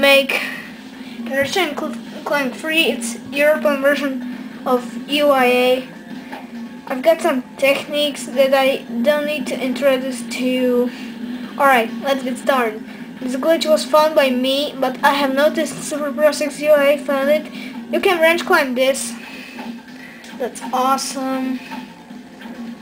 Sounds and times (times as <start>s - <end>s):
Speech: 0.0s - 0.6s, 1.3s - 5.9s, 6.9s - 11.0s, 11.6s - 19.2s, 20.4s - 21.7s.